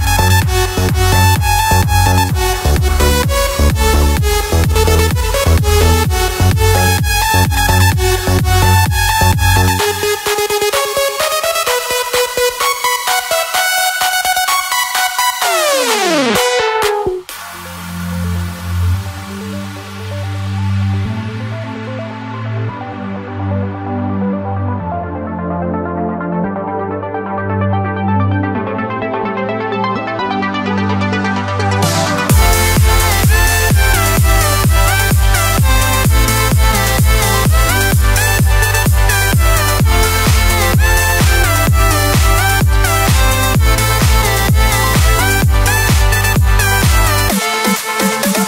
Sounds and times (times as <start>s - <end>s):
Music: 0.0s - 48.4s.